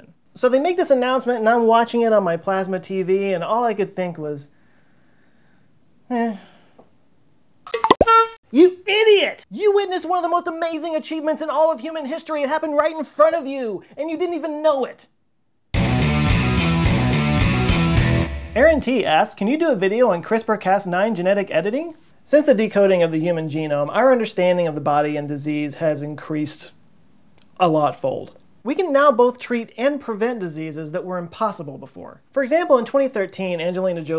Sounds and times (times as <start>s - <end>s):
Speech: 0.0s - 4.5s, 6.1s - 6.5s, 8.5s - 15.1s, 18.6s - 26.8s, 27.6s - 34.1s
Music: 15.8s - 18.8s.